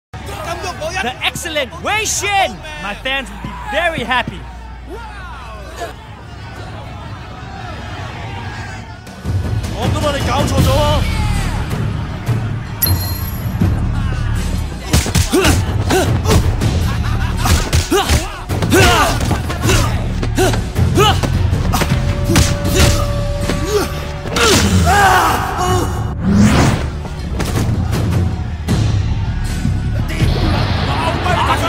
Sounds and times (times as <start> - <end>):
Music: 0.2 - 31.6.